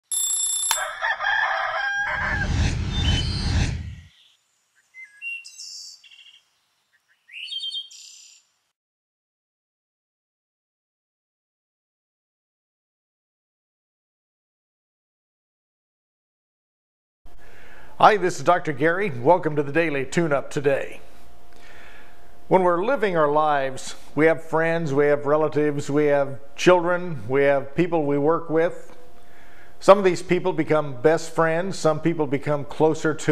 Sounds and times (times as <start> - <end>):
Silence: 2.1 - 4.8.